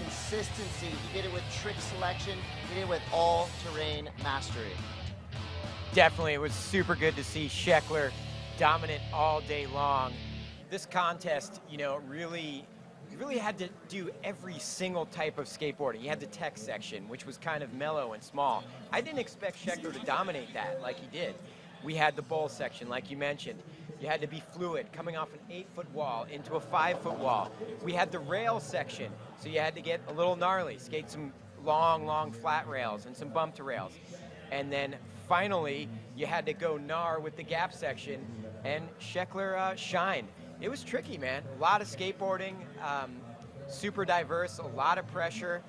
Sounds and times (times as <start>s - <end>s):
Speech: 0.0s - 4.8s, 5.9s - 45.6s
Music: 0.0s - 10.7s, 34.5s - 45.6s.